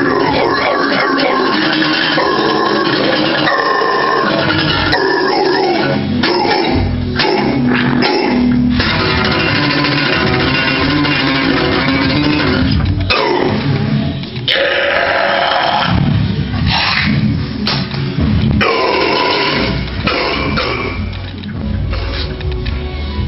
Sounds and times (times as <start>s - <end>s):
Electric guitar: 0.0s - 21.6s.